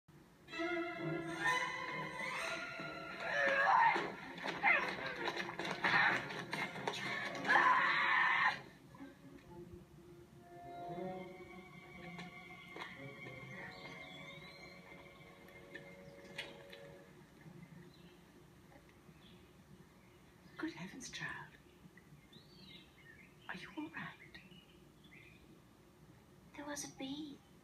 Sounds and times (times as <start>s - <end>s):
Music: 0.4s - 18.4s.